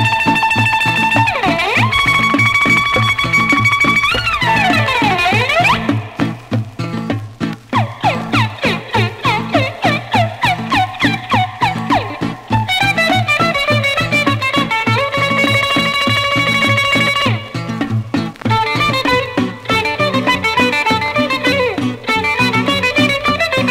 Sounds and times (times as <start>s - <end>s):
Funny music: 0.0s - 23.7s.